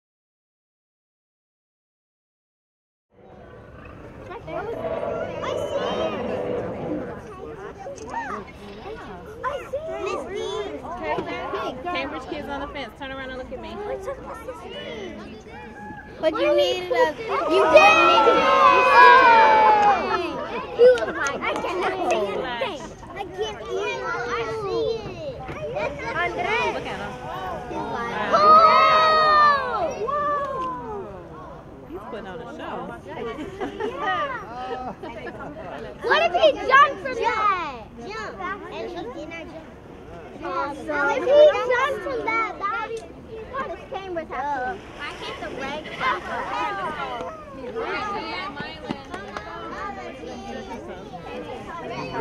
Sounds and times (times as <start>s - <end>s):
Speech: 4.3s - 52.2s.